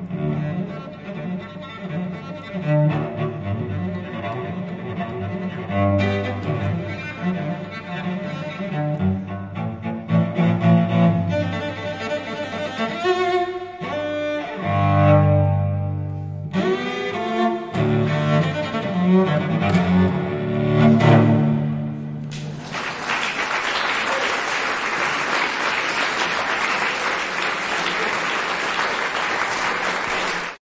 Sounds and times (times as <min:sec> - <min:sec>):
Double bass: 0:00.0 - 0:22.4
Cello: 0:00.0 - 0:22.5
Classical music: 0:00.0 - 0:22.6.